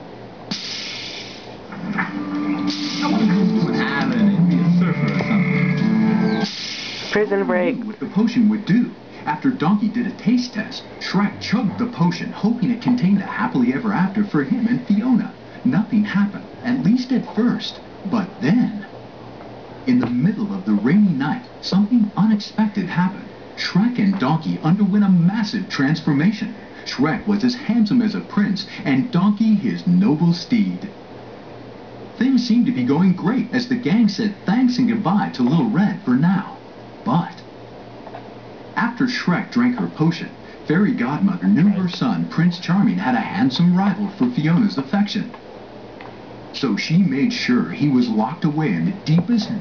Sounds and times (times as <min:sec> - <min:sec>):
Speech: 0:07.1 - 0:18.9, 0:19.8 - 0:31.0, 0:32.2 - 0:37.5, 0:38.8 - 0:45.4, 0:46.5 - 0:49.6.